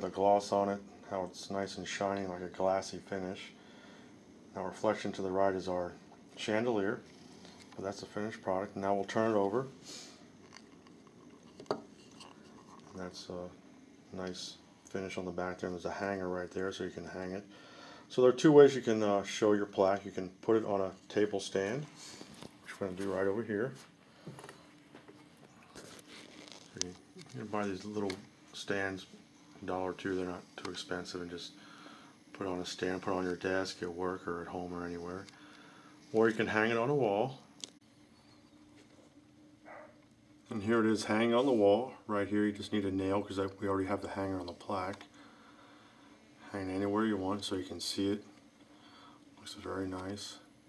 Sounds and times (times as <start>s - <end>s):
Speech: 0.0s - 3.6s, 4.5s - 7.0s, 7.8s - 9.8s, 12.9s - 17.5s, 18.1s - 21.9s, 22.7s - 23.8s, 26.7s - 31.6s, 32.3s - 35.3s, 36.1s - 37.5s, 40.5s - 45.1s, 46.4s - 48.3s, 49.4s - 50.5s.